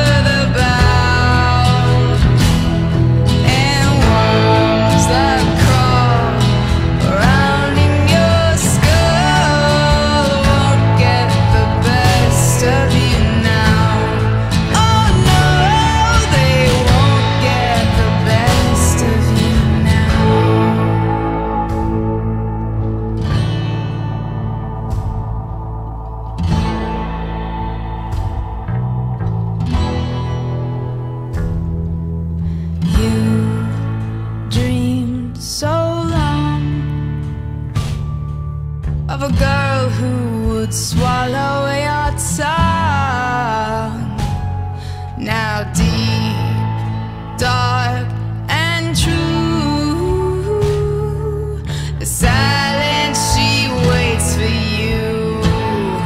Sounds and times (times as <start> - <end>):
Bass guitar: 0.0 - 56.0.